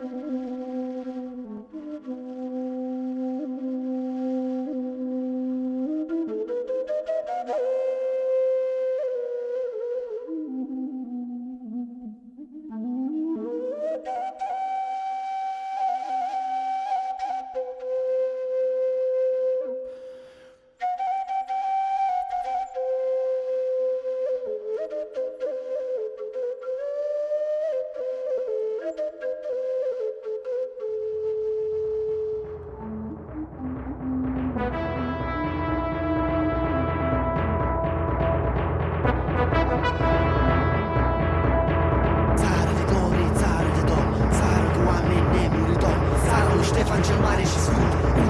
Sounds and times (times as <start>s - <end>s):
Orchestra: 32.6s - 48.2s.